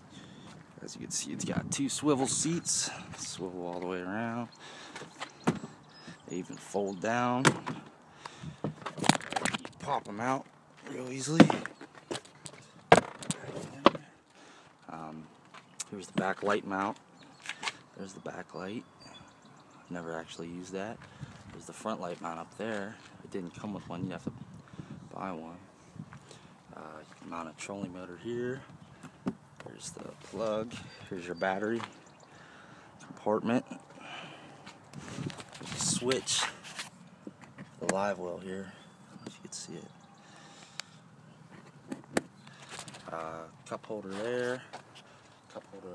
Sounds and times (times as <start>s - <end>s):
Speech: 0.8s - 4.5s, 6.3s - 7.5s, 9.8s - 11.6s, 14.9s - 17.0s, 18.0s - 18.9s, 19.9s - 21.0s, 21.6s - 24.3s, 25.1s - 25.7s, 26.7s - 28.7s, 29.6s - 31.9s, 33.1s - 33.8s, 35.8s - 36.5s, 37.8s - 40.0s, 43.1s - 44.7s, 45.5s - 45.9s.